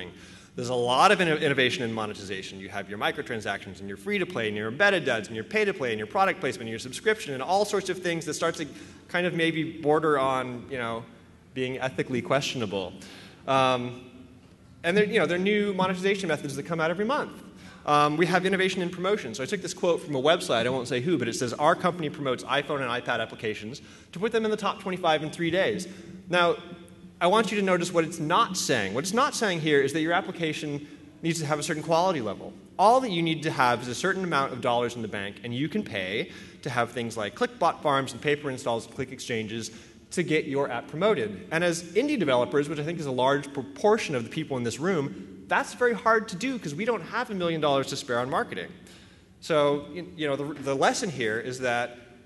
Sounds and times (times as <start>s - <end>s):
Speech: 0.0s - 14.1s, 14.8s - 48.8s, 49.4s - 51.9s.